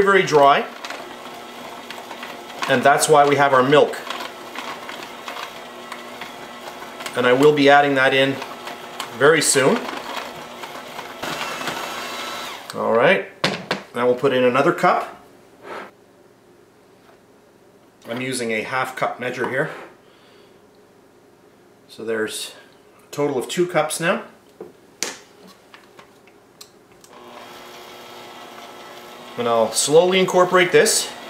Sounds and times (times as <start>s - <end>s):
Blender: 0.0s - 12.8s, 27.1s - 31.2s.